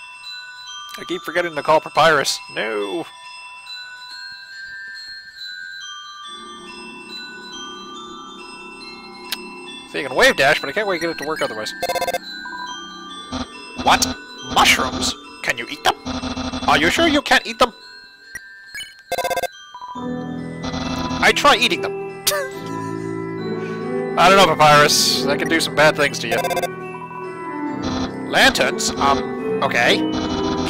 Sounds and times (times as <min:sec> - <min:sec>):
Chime: 0:00.0 - 0:30.7
Glockenspiel: 0:00.0 - 0:30.7
Marimba, xylophone: 0:02.0 - 0:30.7.